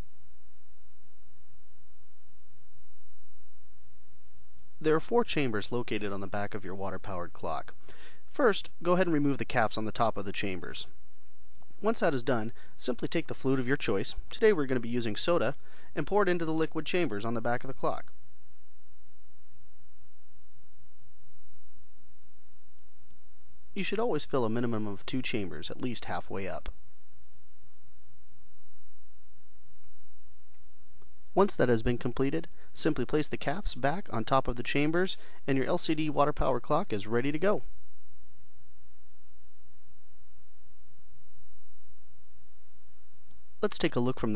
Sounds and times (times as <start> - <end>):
Speech: 4.8 - 10.9, 11.8 - 18.1, 23.8 - 26.8, 31.4 - 37.7, 43.6 - 44.3.